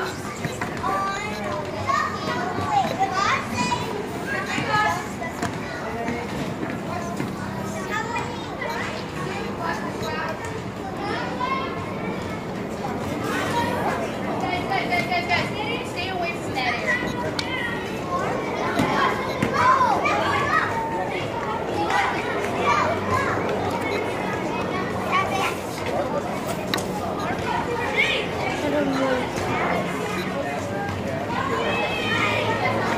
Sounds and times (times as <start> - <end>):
Children playing: 0.0 - 32.9
Speech: 0.0 - 32.9.